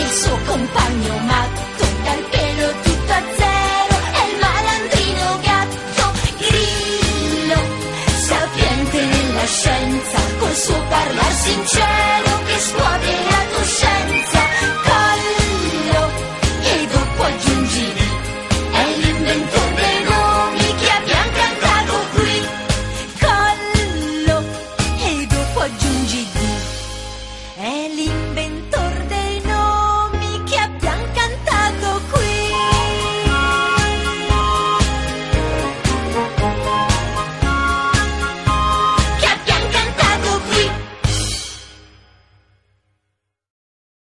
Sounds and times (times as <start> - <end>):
Theme music: 0.0 - 27.7, 32.2 - 42.0.